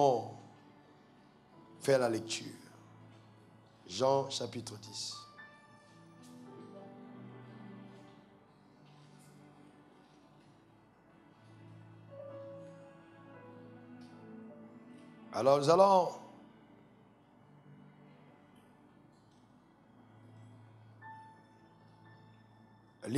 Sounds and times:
Speech: 0.0 - 0.4, 1.8 - 2.7, 3.9 - 5.2, 15.4 - 16.3.

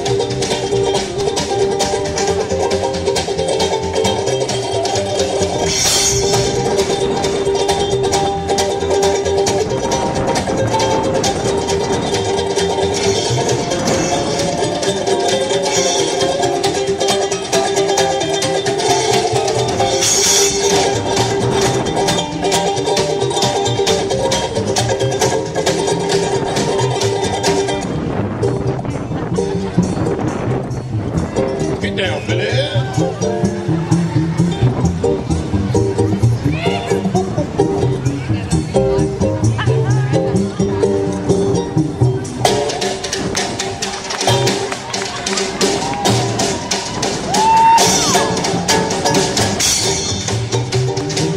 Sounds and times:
Music: 0.0 - 51.3.

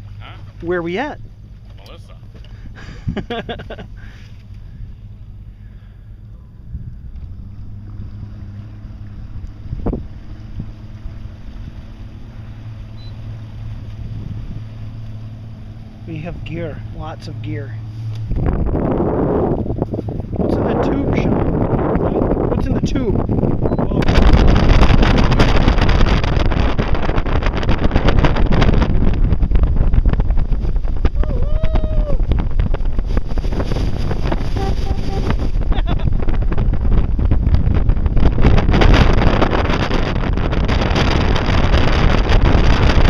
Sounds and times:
Boat, Water vehicle: 0.0 - 43.0
Wind noise (microphone): 2.4 - 5.0, 5.6 - 15.0, 16.1 - 43.0.

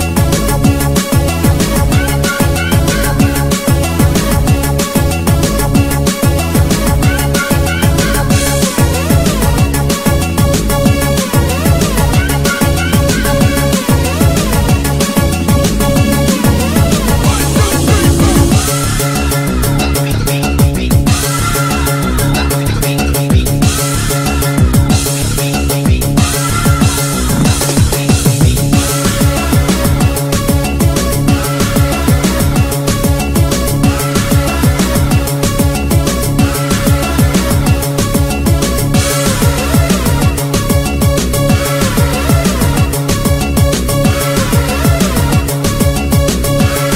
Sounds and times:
Disco: 0.0 - 46.9
House music: 0.1 - 46.9.

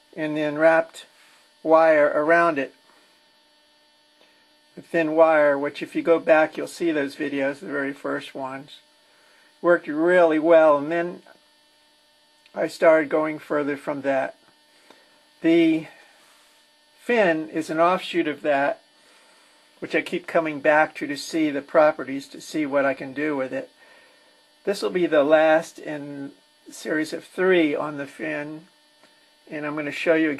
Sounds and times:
Speech: 0.2 - 1.1, 1.7 - 2.8, 4.8 - 8.8, 9.6 - 11.3, 12.5 - 14.4, 15.4 - 16.0, 17.0 - 18.8, 19.8 - 23.7, 24.7 - 28.7, 29.5 - 30.4.

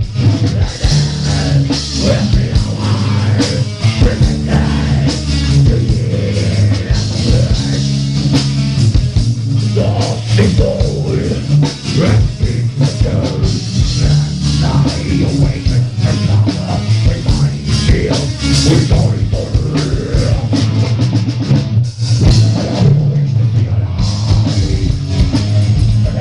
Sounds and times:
Music: 0.0 - 26.2
Singing: 0.2 - 7.9, 9.7 - 20.6.

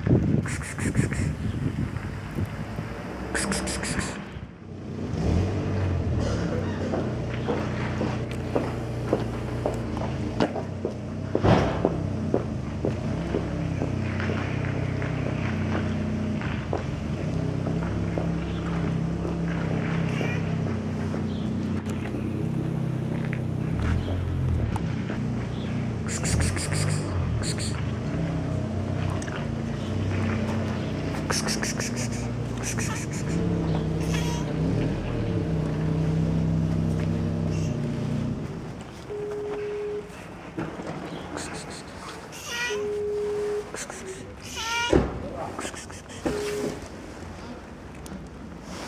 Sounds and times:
Boat, Water vehicle: 6.2 - 35.9, 38.5 - 48.8.

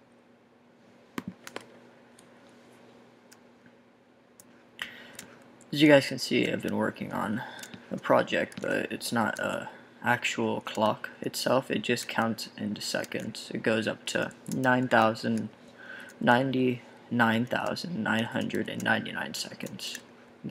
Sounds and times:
Speech: 5.7 - 15.6, 16.2 - 20.5.

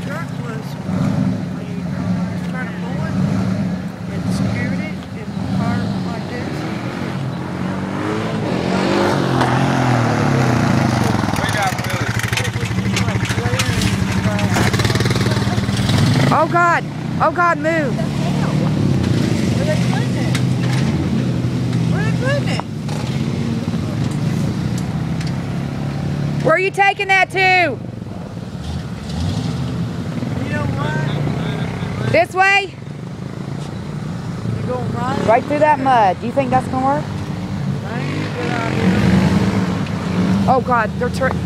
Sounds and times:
Vehicle: 0.0 - 41.4.

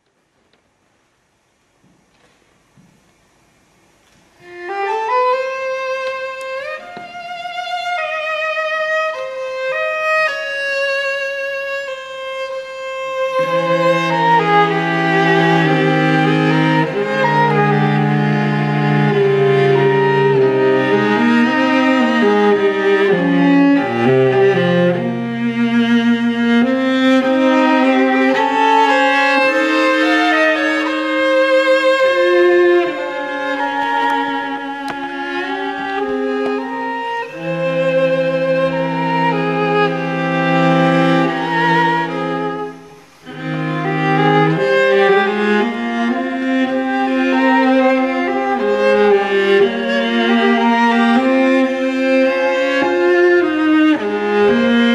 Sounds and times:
Violin, fiddle: 4.4 - 54.9.

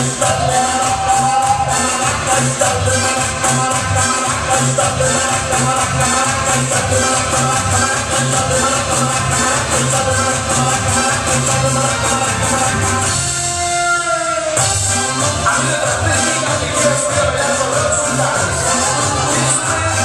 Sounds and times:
Maraca: 0.0 - 13.4, 14.6 - 20.0.

